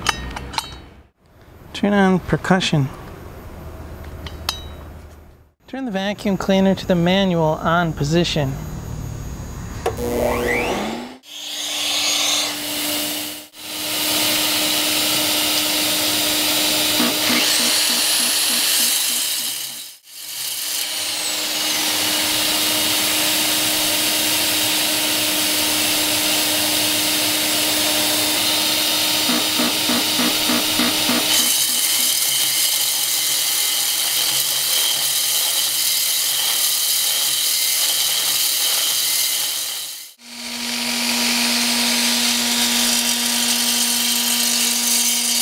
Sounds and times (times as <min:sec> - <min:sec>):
Drill: 0:09.9 - 0:45.4.